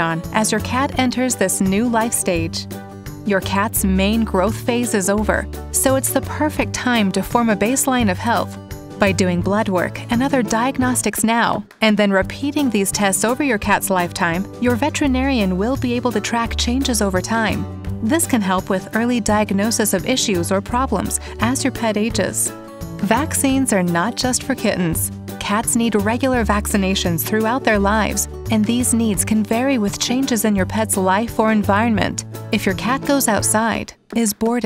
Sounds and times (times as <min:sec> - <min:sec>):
Speech: 0:00.0 - 0:02.6, 0:03.3 - 0:34.6
Music: 0:00.0 - 0:34.6.